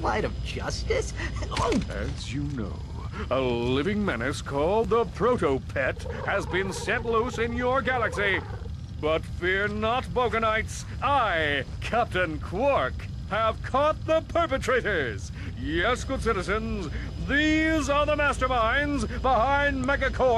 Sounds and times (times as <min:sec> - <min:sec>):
Speech: 0:00.0 - 0:20.3.